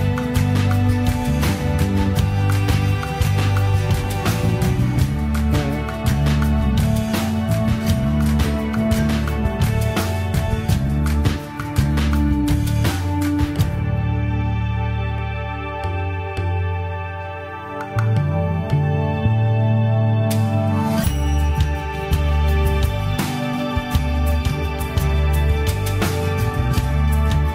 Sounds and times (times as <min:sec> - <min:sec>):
New-age music: 0:00.0 - 0:27.5.